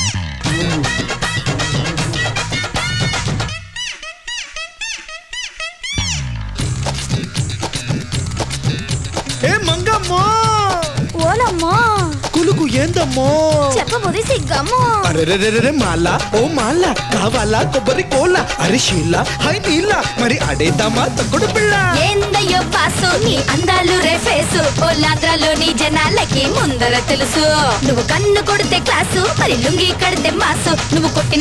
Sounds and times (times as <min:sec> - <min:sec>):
Music: 0:00.0 - 0:31.4.